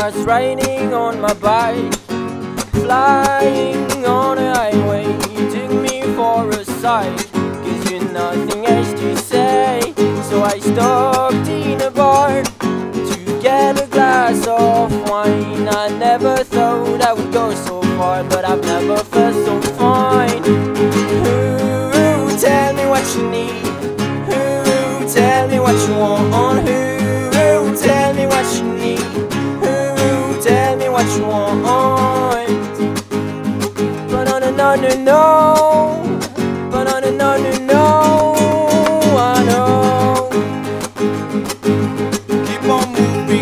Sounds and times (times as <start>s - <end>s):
Music: 0.0s - 43.4s.